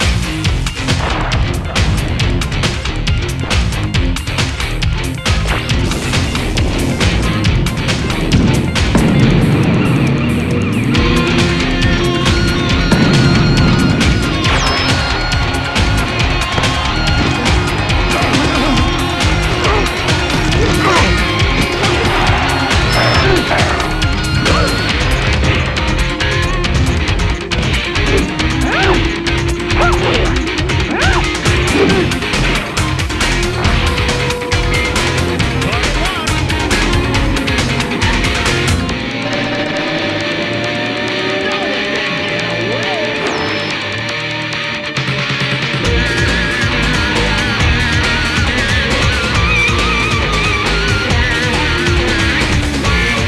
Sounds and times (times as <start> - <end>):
Music: 0.0 - 53.2.